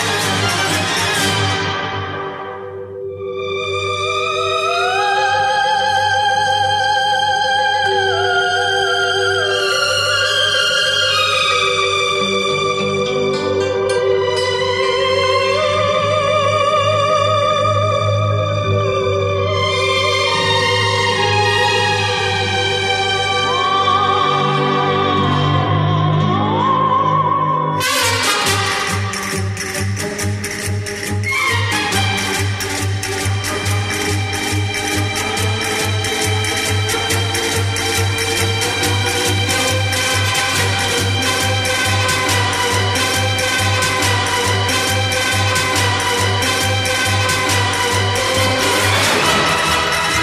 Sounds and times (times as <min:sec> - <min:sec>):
Music: 0:00.0 - 0:50.2.